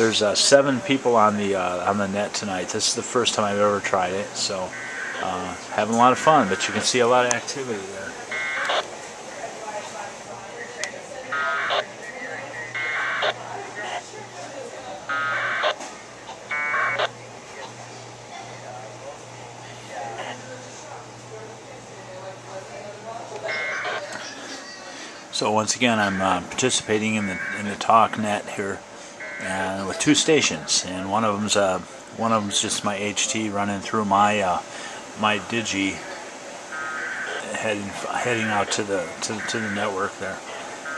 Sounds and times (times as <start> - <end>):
Speech: 0.0 - 8.3, 17.6 - 28.8, 29.4 - 36.4, 37.3 - 40.8
Radio: 3.4 - 14.2, 15.1 - 17.8, 23.3 - 33.4, 36.8 - 40.9.